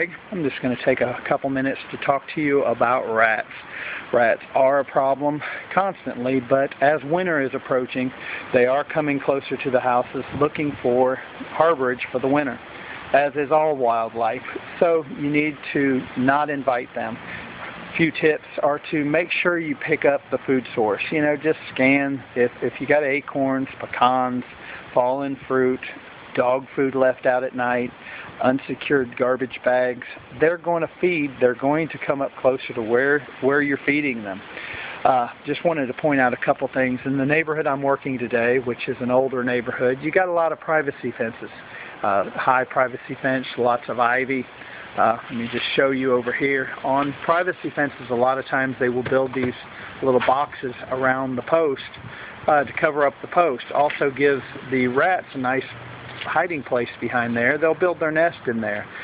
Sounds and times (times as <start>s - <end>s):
Speech: 0.0s - 17.3s, 17.9s - 58.9s.